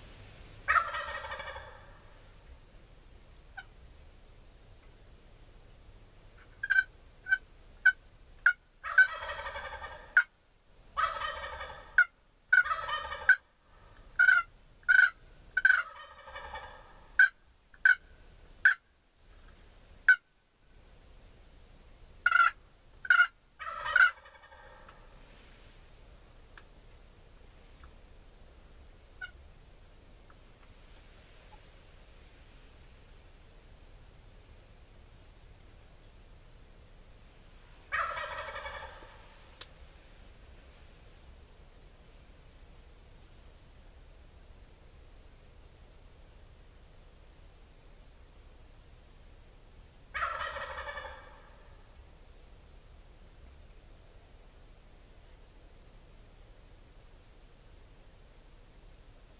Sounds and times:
Gobble: 0.7 - 2.2, 6.4 - 10.3, 11.0 - 13.5, 14.2 - 18.8, 22.2 - 25.1, 29.2 - 29.4, 37.9 - 39.5, 50.1 - 51.9.

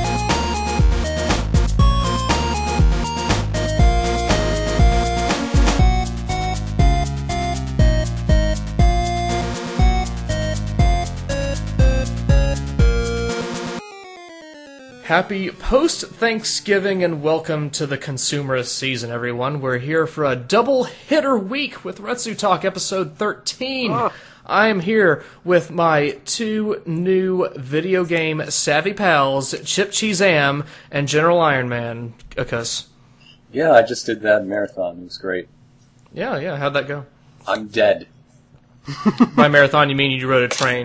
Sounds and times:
Speech: 15.1 - 32.9, 33.5 - 35.5, 36.1 - 38.1, 39.4 - 40.8.

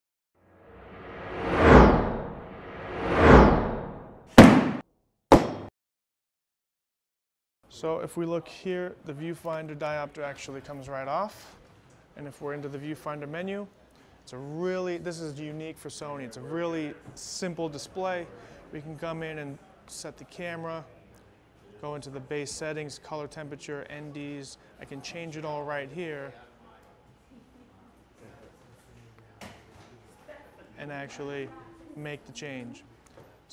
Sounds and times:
Speech: 7.7 - 11.6, 12.2 - 27.1, 28.2 - 32.9.

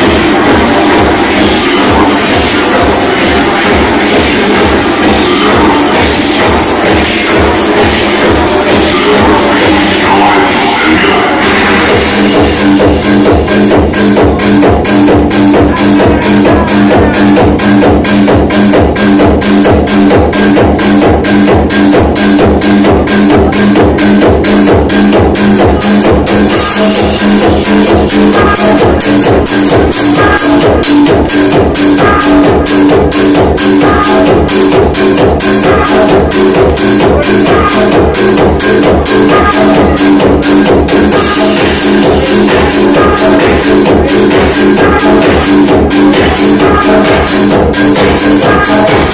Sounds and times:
Electronic dance music: 0.0 - 49.1
House music: 0.0 - 49.1
Techno: 0.0 - 49.1
Trance music: 0.0 - 49.1.

